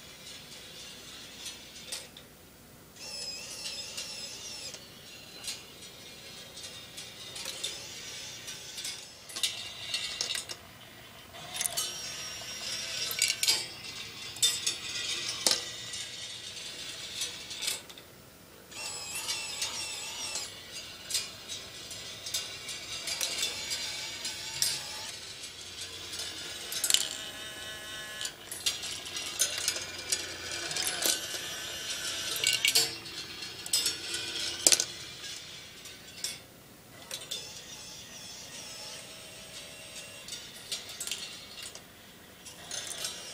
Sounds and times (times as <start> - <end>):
Inside, small room: 0.0 - 43.3.